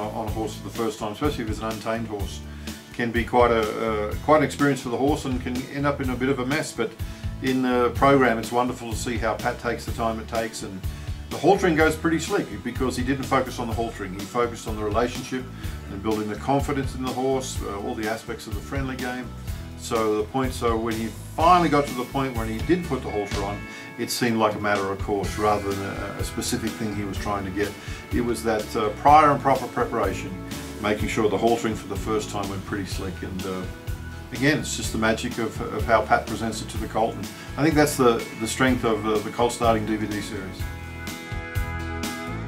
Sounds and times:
Speech: 0:00.0 - 0:40.7
Music: 0:00.0 - 0:42.4.

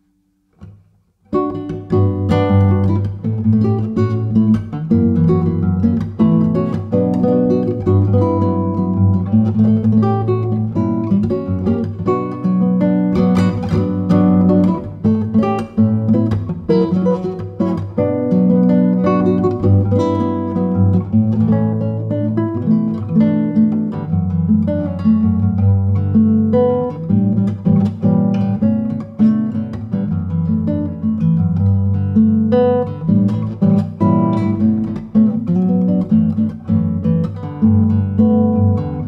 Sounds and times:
Strum: 0:00.0 - 0:39.0.

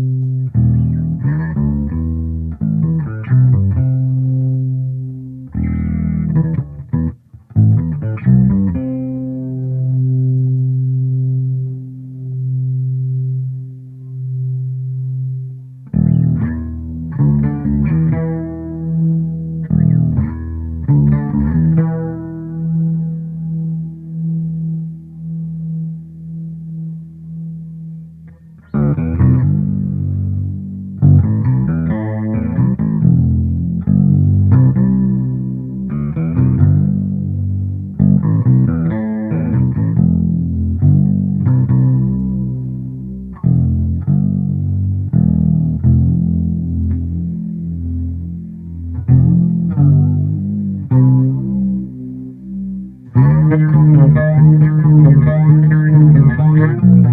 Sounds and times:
Bass guitar: 0:00.0 - 0:57.1
Effects unit: 0:00.0 - 0:57.1.

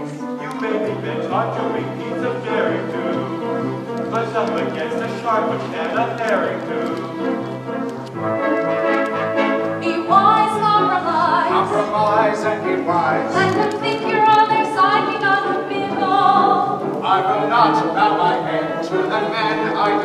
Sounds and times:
Tender music: 0:00.0 - 0:20.0.

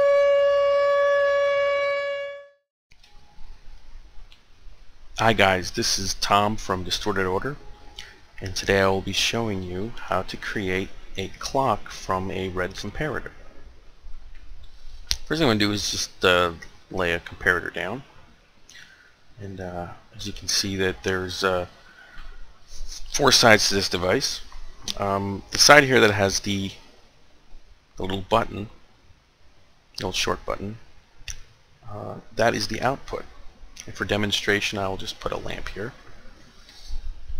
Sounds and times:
Speech: 0:05.2 - 0:07.6, 0:08.4 - 0:13.4, 0:15.3 - 0:18.1, 0:19.4 - 0:21.8, 0:23.0 - 0:26.8, 0:28.0 - 0:28.8, 0:30.0 - 0:30.8, 0:31.8 - 0:36.0.

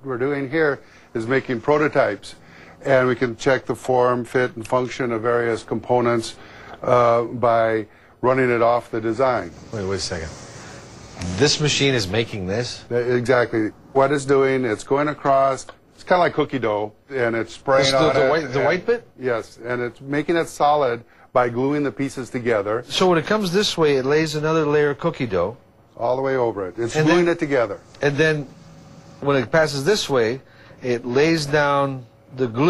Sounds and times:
Speech: 0:00.0 - 0:10.4, 0:29.2 - 0:32.7.

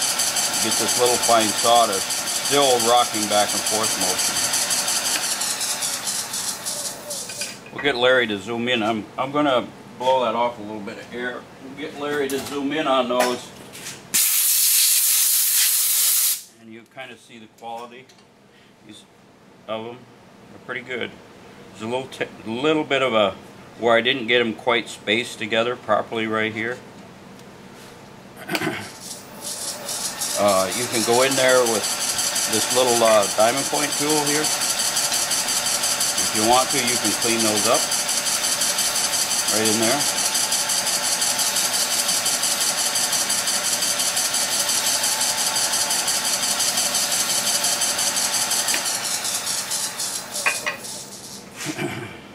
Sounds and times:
Speech: 0:00.6 - 0:04.4, 0:07.7 - 0:13.6, 0:16.6 - 0:18.1, 0:18.8 - 0:19.1, 0:19.7 - 0:21.2, 0:21.8 - 0:26.8, 0:30.4 - 0:31.8, 0:32.5 - 0:34.5, 0:36.2 - 0:37.9, 0:39.5 - 0:40.1.

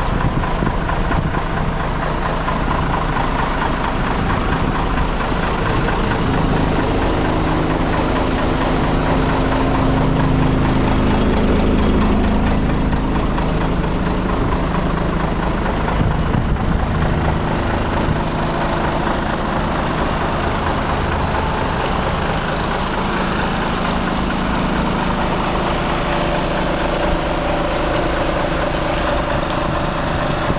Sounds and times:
Truck: 0:00.0 - 0:30.5.

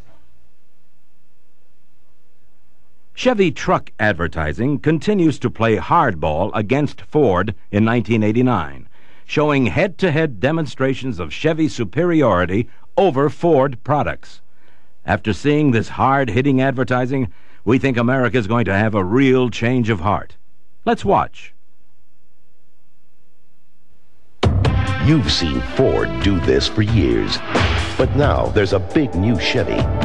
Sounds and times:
Speech: 0:03.2 - 0:14.4, 0:15.1 - 0:21.6, 0:25.0 - 0:27.4, 0:28.0 - 0:29.9.

